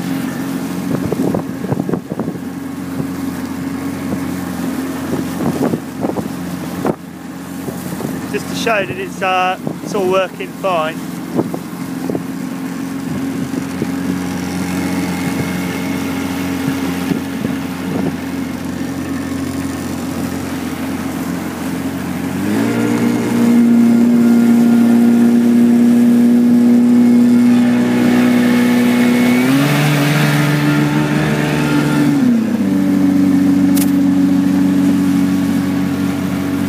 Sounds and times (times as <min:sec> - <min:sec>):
Motorboat, speedboat: 0:00.0 - 0:36.6.